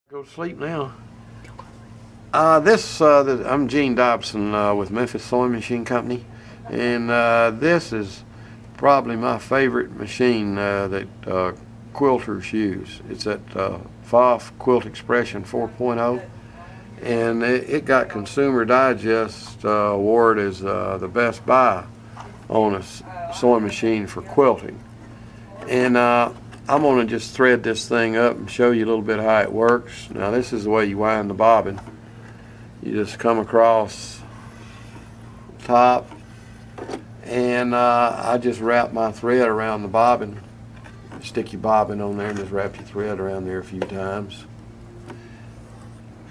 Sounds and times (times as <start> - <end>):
Speech: 0.1 - 1.0, 2.4 - 8.2, 8.8 - 21.9, 22.5 - 24.9, 25.5 - 31.9, 32.8 - 34.3, 35.6 - 36.2, 37.2 - 40.5, 41.2 - 44.5.